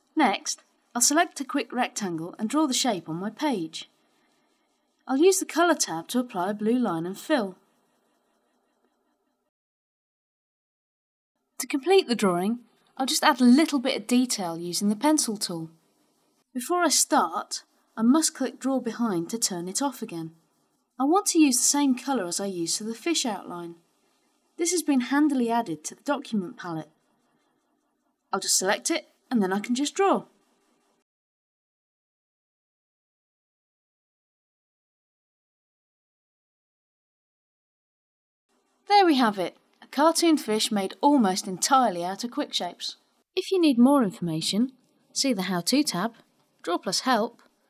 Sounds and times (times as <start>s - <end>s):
Speech: 0.1s - 3.9s, 5.1s - 7.6s, 11.6s - 15.8s, 16.5s - 20.4s, 21.0s - 23.8s, 24.6s - 27.0s, 28.3s - 30.3s, 38.9s - 47.5s.